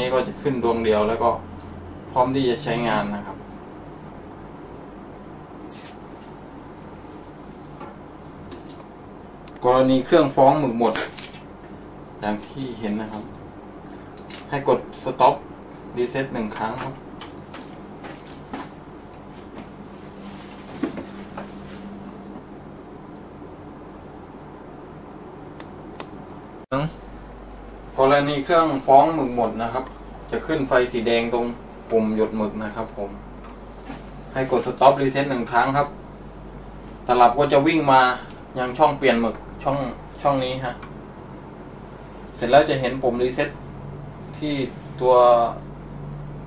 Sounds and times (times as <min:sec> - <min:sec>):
Speech: 0:00.0 - 0:01.4, 0:02.1 - 0:03.4, 0:09.6 - 0:11.2, 0:12.2 - 0:13.4, 0:14.5 - 0:17.0, 0:26.7 - 0:27.0, 0:28.0 - 0:33.2, 0:34.3 - 0:36.0, 0:37.1 - 0:40.8, 0:42.4 - 0:43.6, 0:44.3 - 0:45.7.